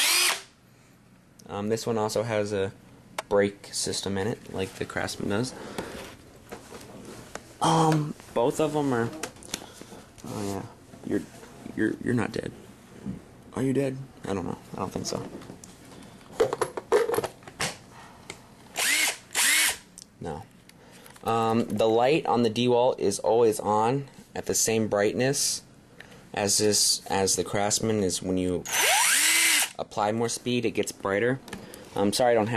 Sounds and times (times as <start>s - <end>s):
Drill: 0.0s - 0.5s, 18.8s - 19.8s, 28.7s - 29.8s.